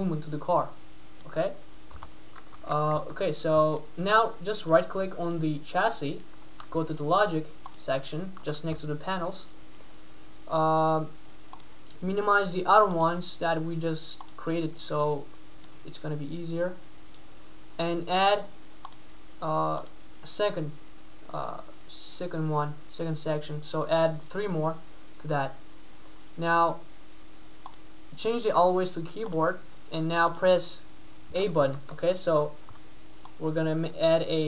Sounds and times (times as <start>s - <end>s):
Speech: 0.0s - 1.6s, 2.6s - 9.6s, 10.5s - 11.2s, 12.0s - 15.3s, 15.9s - 16.8s, 17.8s - 18.5s, 19.4s - 25.6s, 26.4s - 26.9s, 28.2s - 32.6s, 33.4s - 34.4s.